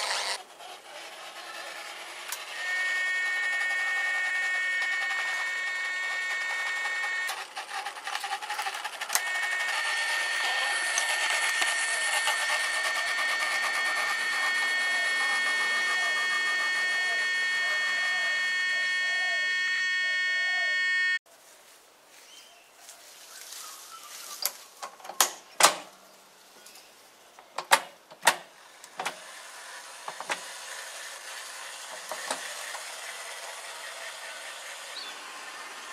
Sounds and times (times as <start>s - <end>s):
Outside, rural or natural: 0.0s - 35.9s.